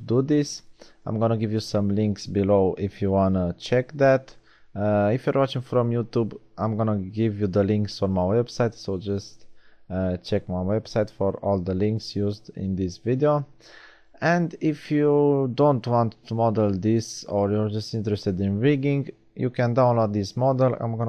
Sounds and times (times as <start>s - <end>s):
Speech: 0.0s - 13.5s, 14.2s - 21.0s.